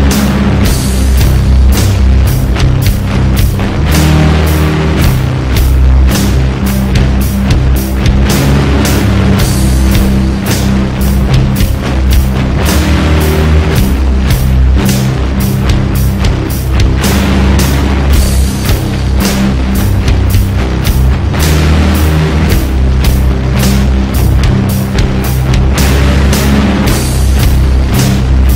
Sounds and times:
Background music: 0:00.0 - 0:28.5.

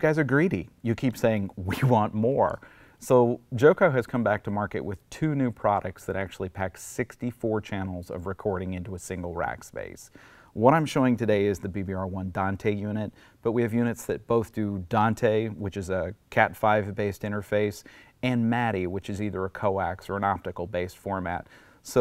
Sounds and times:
Speech: 0:00.0 - 0:22.0.

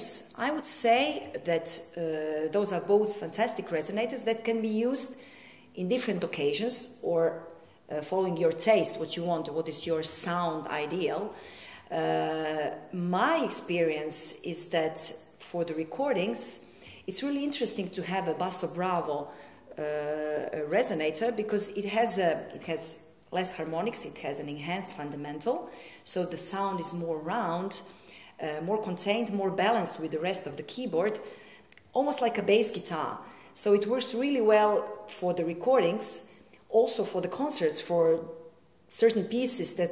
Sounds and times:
Speech: 0:00.0 - 0:05.2, 0:05.8 - 0:31.2, 0:31.9 - 0:39.9.

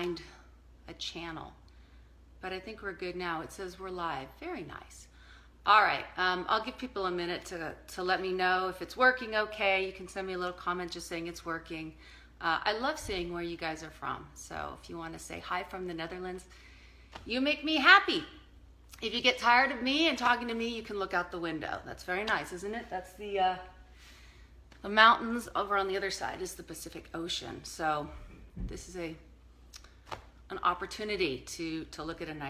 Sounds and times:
Speech: 0:00.0 - 0:01.6, 0:02.4 - 0:05.1, 0:05.7 - 0:16.5, 0:17.3 - 0:18.4, 0:19.0 - 0:23.8, 0:24.8 - 0:29.3, 0:30.5 - 0:32.4.

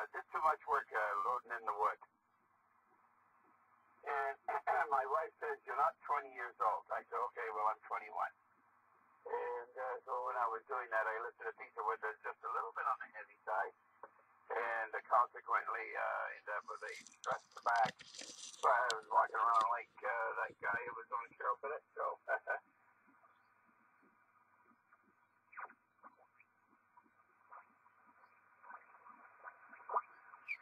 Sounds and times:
Radio: 0:00.0 - 0:02.0, 0:04.0 - 0:08.3, 0:09.3 - 0:22.6
Speech: 0:00.0 - 0:02.0, 0:04.0 - 0:08.4, 0:09.3 - 0:13.7, 0:14.5 - 0:22.6.

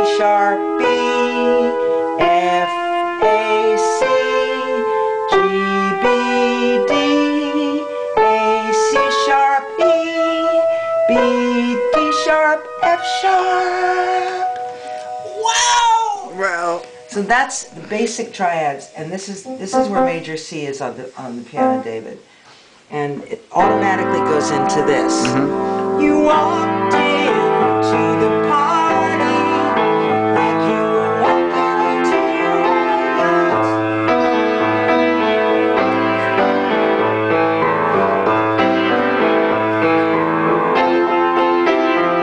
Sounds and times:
Music: 0:00.0 - 0:20.3, 0:21.6 - 0:22.0, 0:23.6 - 0:42.2.

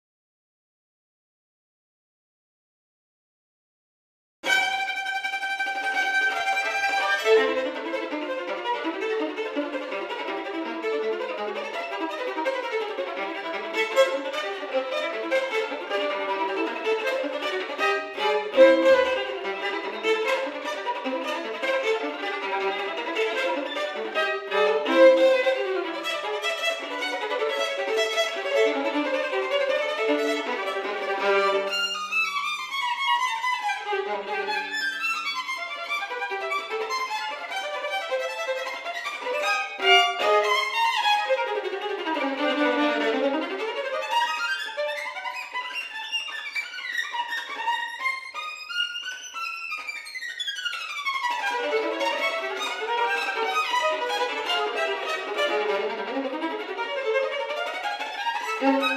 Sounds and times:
Pizzicato: 0:04.5 - 0:32.2, 0:33.0 - 0:58.9.

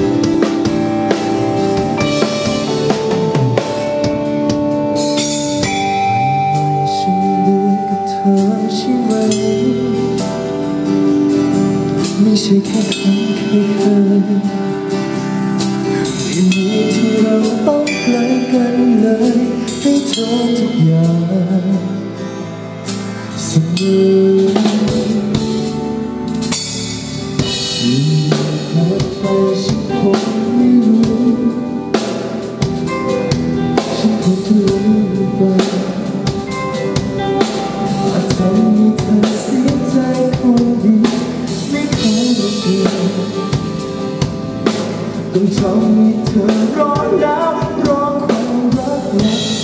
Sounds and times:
Music: 0:00.0 - 0:49.6.

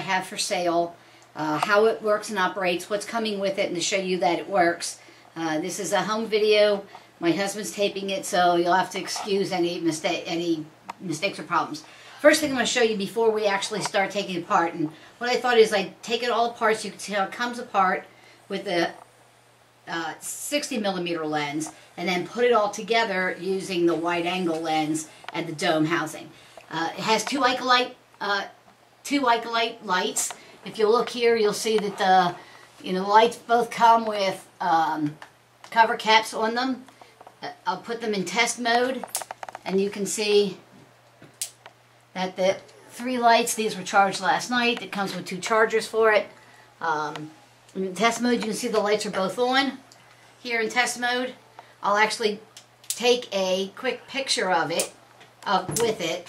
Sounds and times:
Speech: 0:00.0 - 0:19.0, 0:19.9 - 0:40.6, 0:42.2 - 0:49.8, 0:50.4 - 0:56.2.

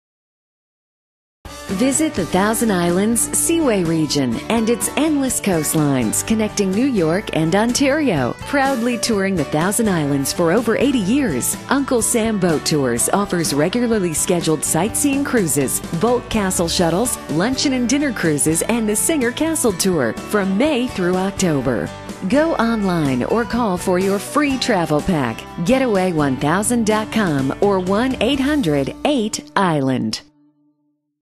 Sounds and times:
Music: 0:01.5 - 0:31.2
Speech: 0:01.7 - 0:30.3.

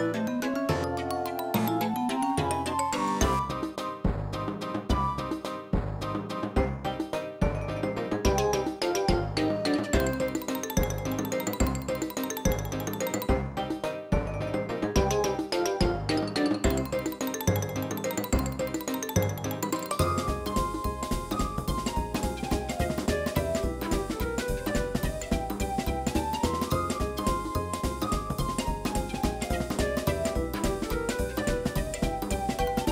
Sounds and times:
Music: 0:00.0 - 0:32.9.

